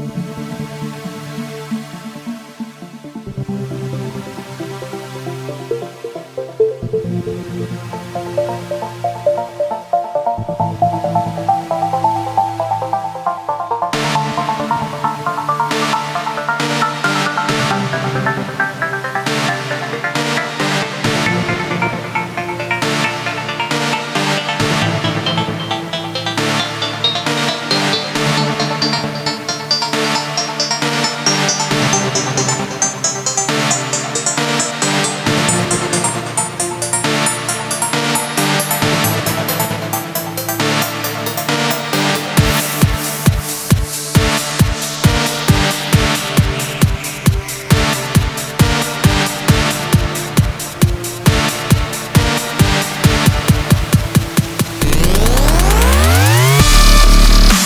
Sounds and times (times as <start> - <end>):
Dubstep: 0.1 - 57.6.